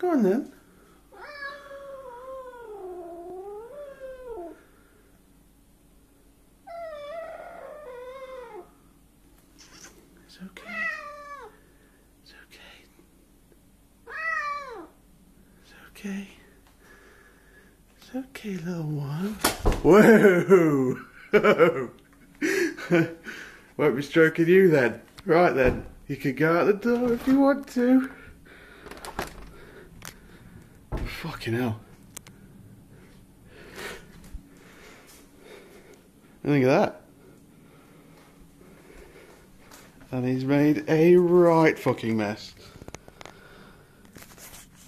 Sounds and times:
Speech: 0.0 - 0.6, 18.0 - 21.1, 23.8 - 28.2, 31.0 - 31.9, 36.4 - 37.0, 40.1 - 42.6
Cat: 1.1 - 4.6, 6.7 - 8.7, 10.6 - 11.6, 14.1 - 15.0.

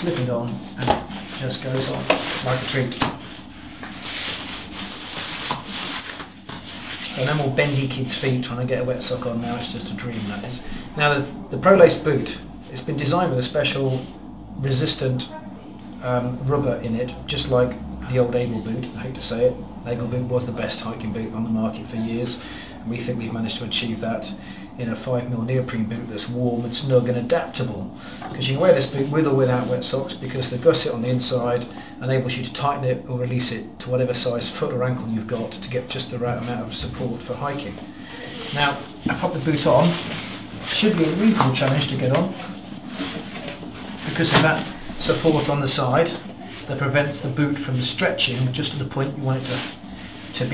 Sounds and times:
Speech: 0.0 - 3.2, 7.1 - 42.5, 43.4 - 50.5.

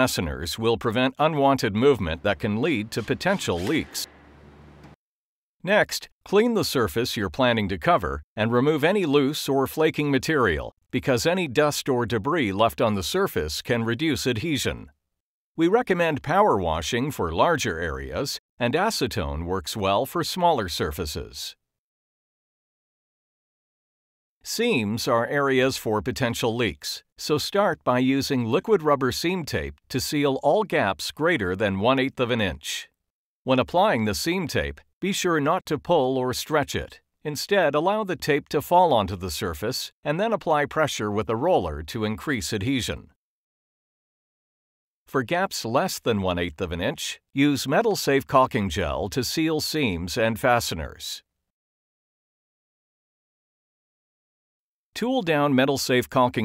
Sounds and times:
Speech: 0.0 - 4.1, 5.6 - 14.9, 15.6 - 21.6, 24.5 - 43.2, 45.1 - 51.3, 55.0 - 56.4.

